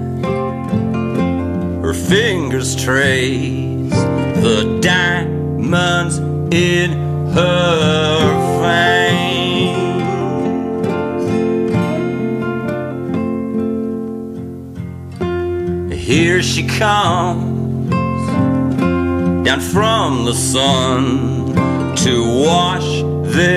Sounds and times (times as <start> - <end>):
Music: 0.0 - 23.5.